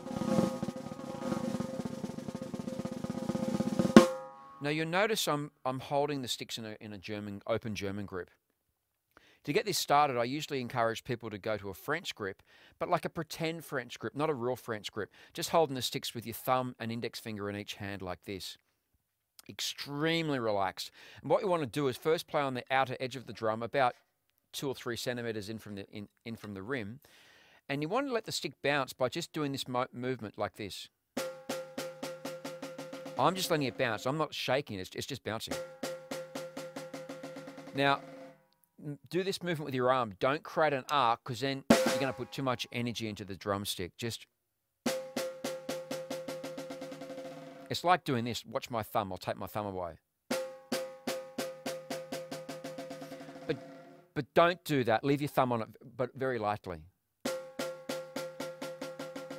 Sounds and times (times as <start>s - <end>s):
Speech: 4.6s - 8.4s, 9.4s - 18.6s, 19.4s - 27.0s, 27.7s - 30.9s, 33.2s - 35.6s, 37.8s - 38.0s, 38.8s - 44.3s, 47.7s - 50.0s, 54.2s - 56.9s.